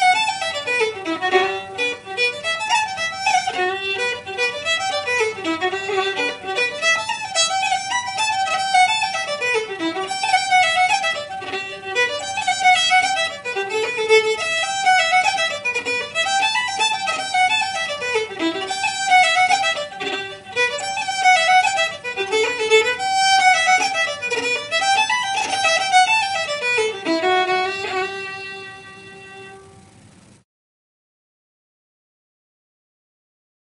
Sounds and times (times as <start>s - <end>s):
Classical music: 0.0s - 29.9s
Violin, fiddle: 0.0s - 30.0s.